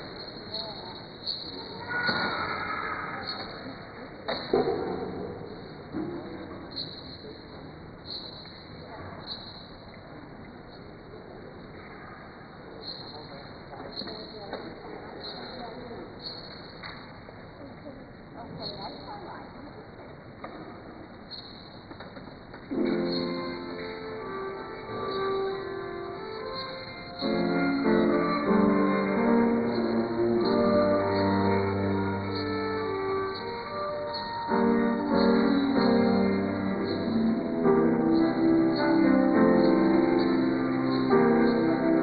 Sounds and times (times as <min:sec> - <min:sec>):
Cello: 0:22.8 - 0:42.0.